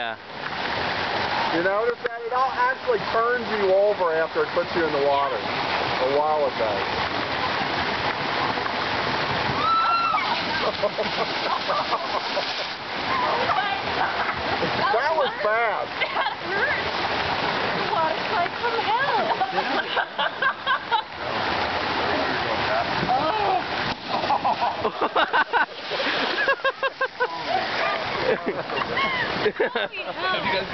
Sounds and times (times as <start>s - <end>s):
Stream: 0.0s - 30.7s.